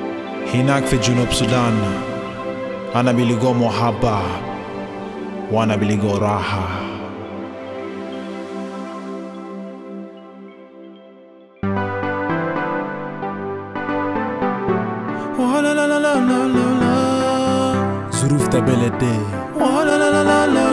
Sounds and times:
New-age music: 0.0 - 20.7.

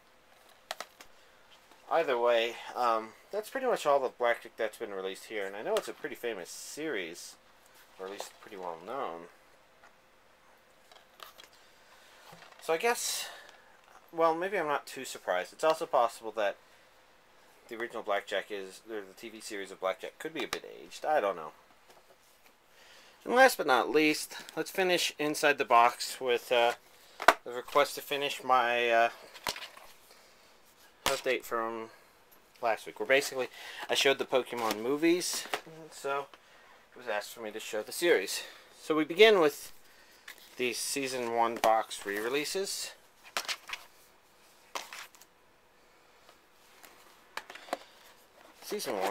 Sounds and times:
Inside, small room: 0.0 - 49.1
Speech: 1.9 - 7.4, 8.0 - 9.4, 12.6 - 13.5, 14.1 - 16.6, 17.7 - 21.6, 23.2 - 26.8, 27.4 - 29.2, 31.1 - 32.0, 32.6 - 36.3, 37.0 - 39.7, 40.6 - 43.0, 48.6 - 49.1.

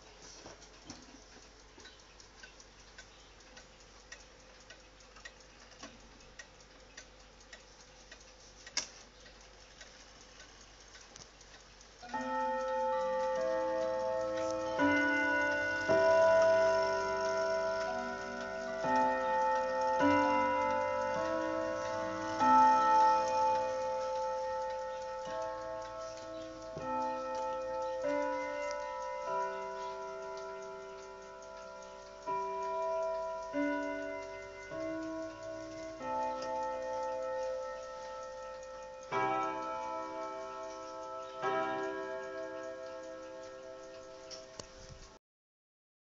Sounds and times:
Clock: 0.0 - 45.2
Inside, small room: 0.0 - 45.2.

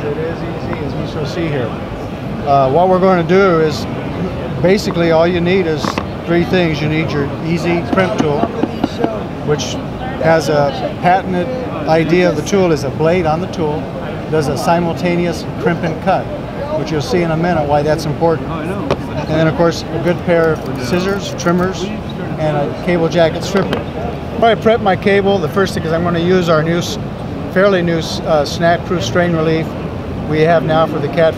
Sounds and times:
Speech: 0.0 - 1.8, 2.5 - 31.3.

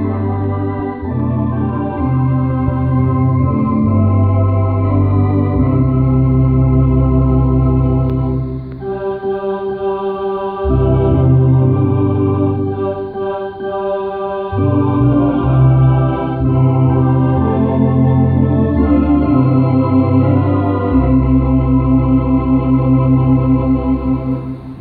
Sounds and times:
Hammond organ: 0.0 - 24.8.

